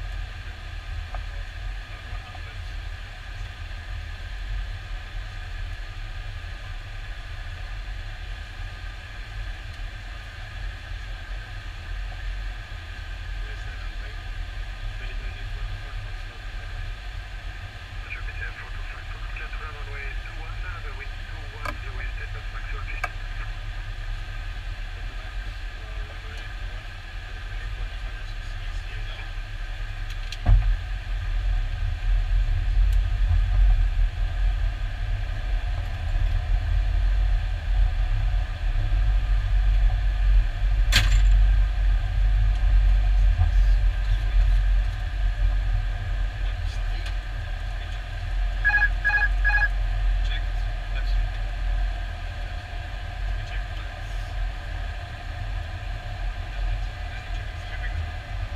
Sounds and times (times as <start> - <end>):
Speech: 1.2 - 2.8, 13.4 - 16.9, 18.0 - 23.6, 24.9 - 29.4, 46.4 - 48.0, 50.2 - 51.6, 53.3 - 54.4, 56.5 - 58.5.